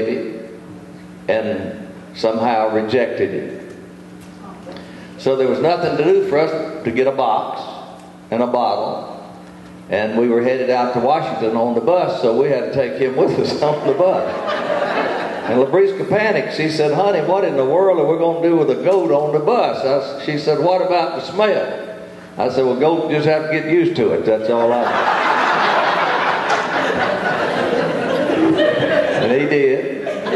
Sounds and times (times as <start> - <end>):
Speech: 1.3 - 3.6, 4.4 - 9.2, 9.9 - 14.3, 15.5 - 21.8, 22.4 - 24.9, 29.2 - 30.0.